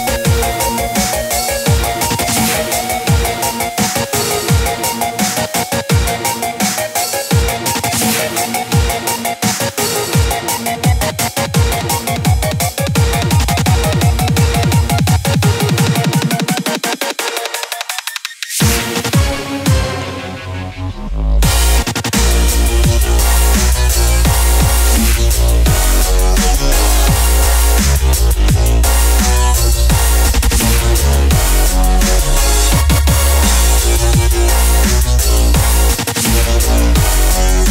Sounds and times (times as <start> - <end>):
Music: 0.0 - 37.7.